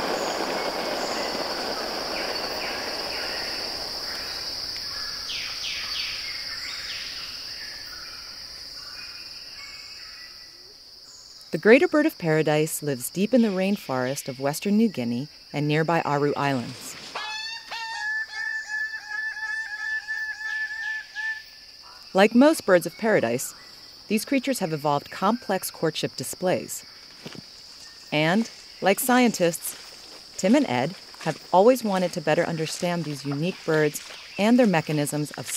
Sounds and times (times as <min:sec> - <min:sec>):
Speech: 0:11.6 - 0:16.9, 0:22.2 - 0:23.5, 0:24.1 - 0:26.8, 0:28.2 - 0:29.7, 0:30.4 - 0:35.5.